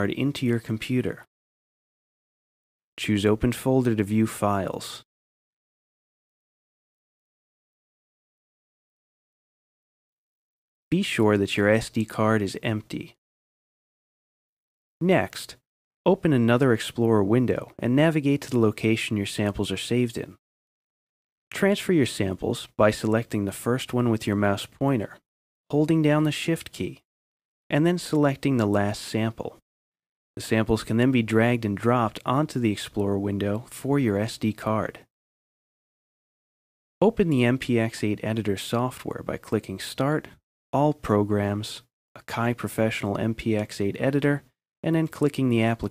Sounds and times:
Speech: 0:00.0 - 0:01.3, 0:03.0 - 0:05.1, 0:10.9 - 0:13.2, 0:15.0 - 0:20.4, 0:21.5 - 0:27.1, 0:27.7 - 0:29.6, 0:30.4 - 0:35.1, 0:37.0 - 0:45.9.

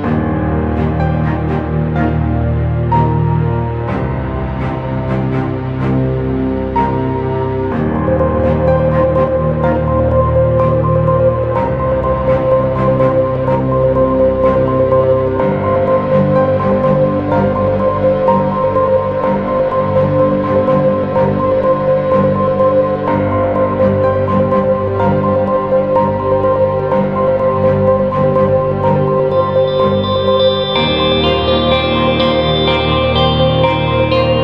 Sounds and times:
Music: 0:00.0 - 0:34.4.

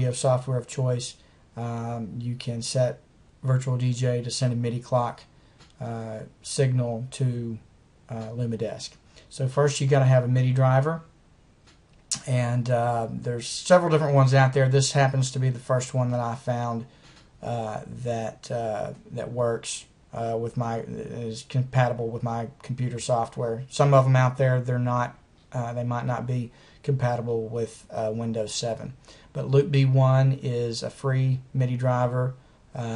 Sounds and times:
Speech: 0:00.0 - 0:11.1, 0:12.1 - 0:32.9.

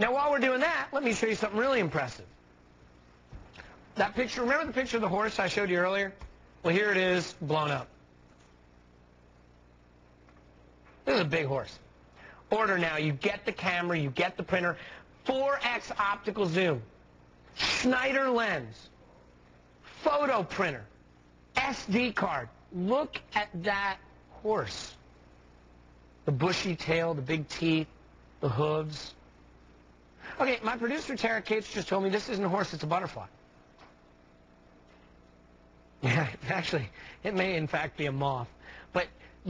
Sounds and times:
Speech: 0:00.0 - 0:02.3, 0:04.0 - 0:07.9, 0:11.0 - 0:11.8, 0:12.5 - 0:16.9, 0:17.6 - 0:19.0, 0:19.9 - 0:20.9, 0:21.5 - 0:25.0, 0:26.2 - 0:29.2, 0:30.3 - 0:33.4, 0:36.0 - 0:39.4.

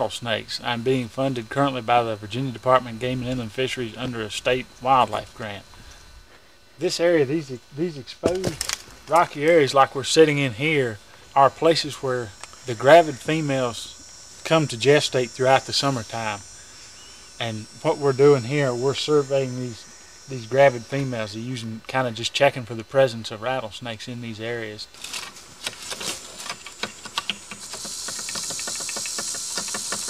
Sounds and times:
Speech: 0:00.0 - 0:05.7, 0:06.8 - 0:16.4, 0:17.4 - 0:24.9
Outside, rural or natural: 0:00.0 - 0:30.0.

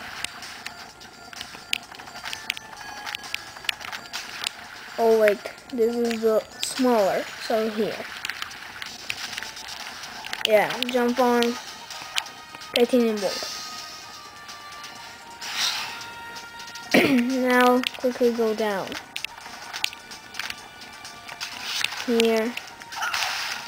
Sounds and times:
Music: 0:00.0 - 0:23.6
Speech: 0:05.0 - 0:08.0, 0:10.5 - 0:11.6, 0:12.8 - 0:13.5, 0:17.2 - 0:19.0, 0:22.1 - 0:22.6.

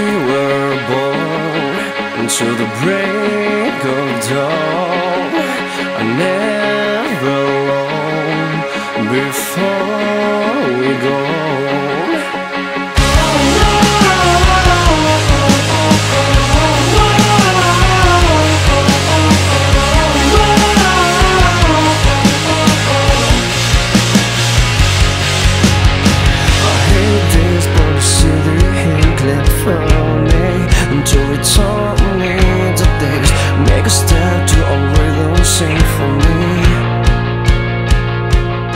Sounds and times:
Music: 0:00.0 - 0:38.7.

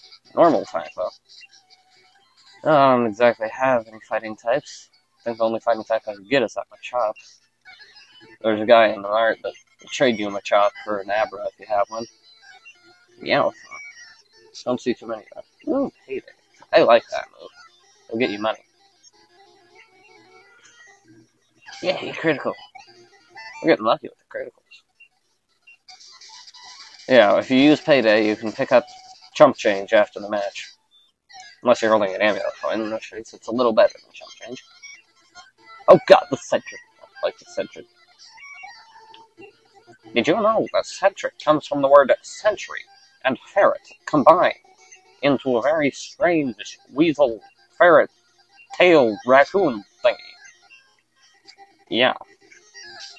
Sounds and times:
Speech: 0:00.4 - 0:01.1, 0:02.7 - 0:07.2, 0:08.4 - 0:12.1, 0:13.2 - 0:13.8, 0:14.6 - 0:17.5, 0:18.1 - 0:18.6, 0:21.7 - 0:22.7, 0:23.6 - 0:24.6, 0:27.1 - 0:30.7, 0:31.4 - 0:34.6, 0:35.9 - 0:37.8, 0:40.2 - 0:44.6, 0:45.2 - 0:48.1, 0:48.8 - 0:50.4, 0:51.9 - 0:52.2.

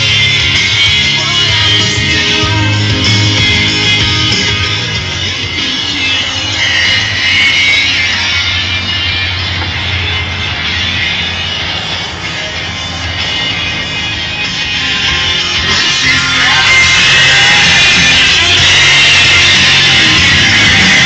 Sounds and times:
Music: 0:00.0 - 0:21.0.

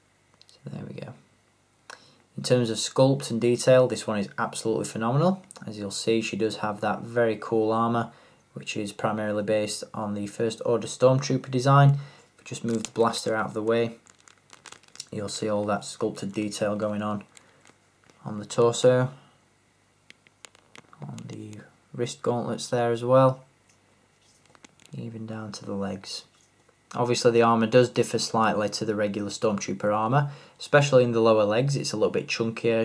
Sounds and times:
Inside, small room: 0:00.0 - 0:32.8
Speech: 0:00.5 - 0:01.2, 0:02.4 - 0:14.0, 0:15.0 - 0:17.3, 0:18.2 - 0:19.2, 0:21.0 - 0:23.5, 0:24.9 - 0:26.3, 0:26.9 - 0:32.8.

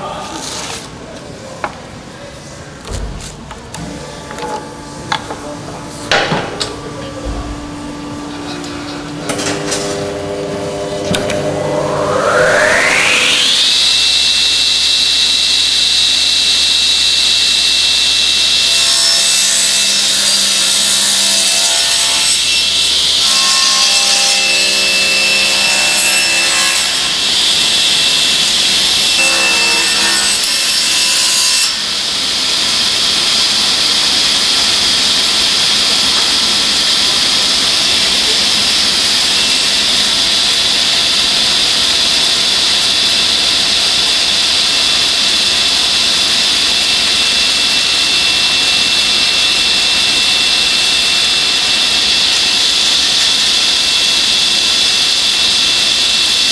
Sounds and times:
Sawing: 0:04.0 - 0:56.5.

